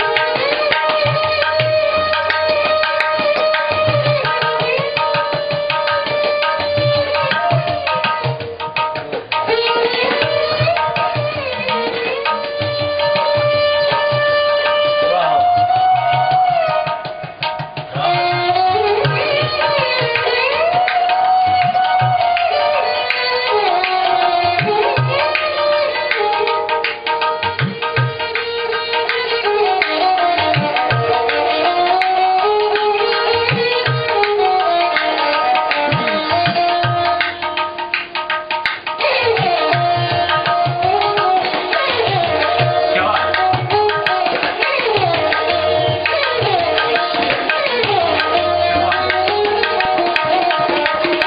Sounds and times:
Tabla: 0:00.0 - 0:51.2.

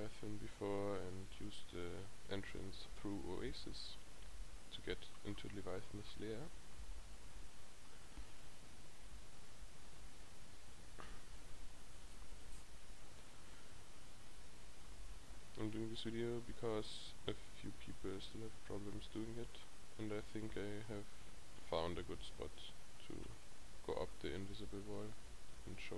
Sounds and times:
Speech: 0:00.0 - 0:04.0, 0:04.7 - 0:06.6, 0:15.5 - 0:25.9.

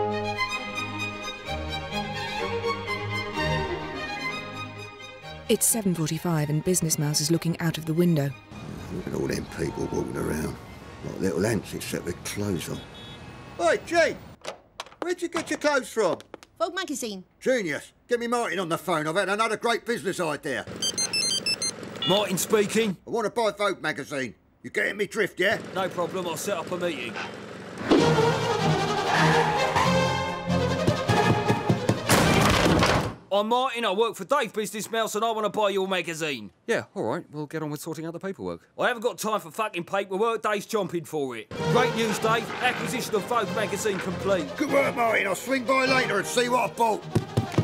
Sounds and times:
Music: 0:00.0 - 0:10.2, 0:27.8 - 0:32.4, 0:41.5 - 0:47.6.

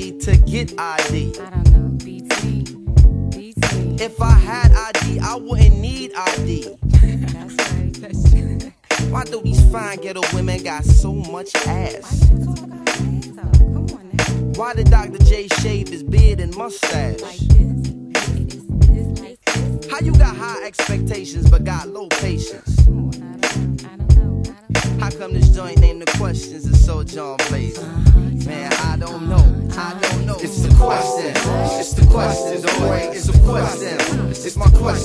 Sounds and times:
Music: 0:00.0 - 0:35.0.

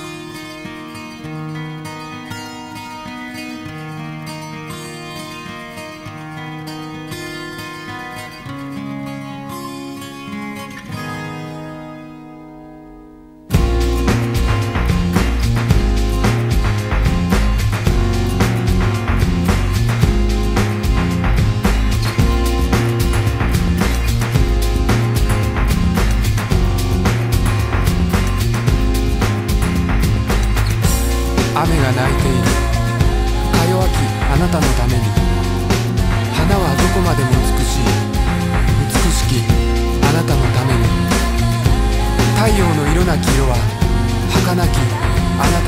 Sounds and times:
Music: 0:00.0 - 0:45.6
Speech: 0:31.5 - 0:32.7, 0:33.4 - 0:35.2, 0:36.3 - 0:38.1, 0:38.7 - 0:41.1, 0:42.2 - 0:45.6.

